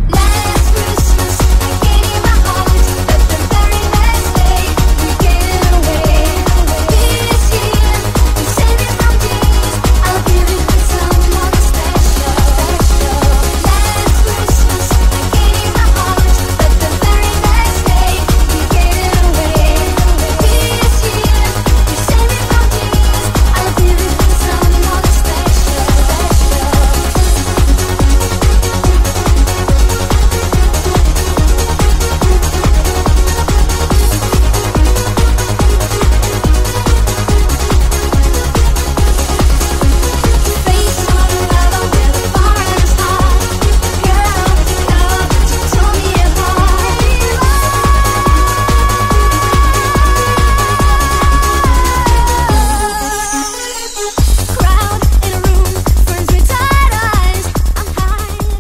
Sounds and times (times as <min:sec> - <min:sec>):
Techno: 0:00.0 - 0:58.6.